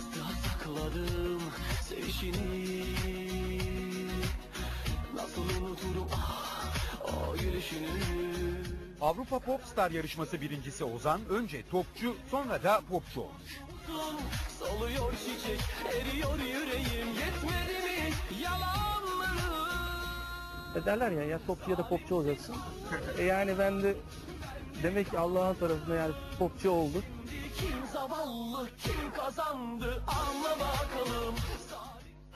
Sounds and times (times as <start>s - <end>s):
Music: 0.0s - 32.3s
Speech: 9.0s - 13.5s, 20.8s - 24.0s, 24.8s - 27.1s.